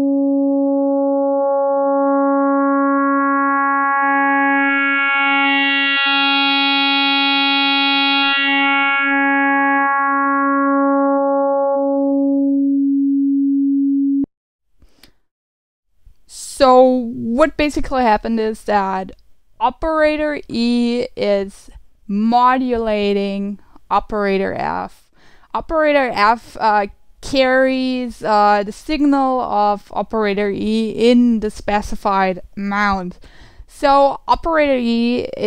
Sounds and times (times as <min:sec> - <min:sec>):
Synthesizer: 0:00.0 - 0:12.8
Speech: 0:16.3 - 0:35.4.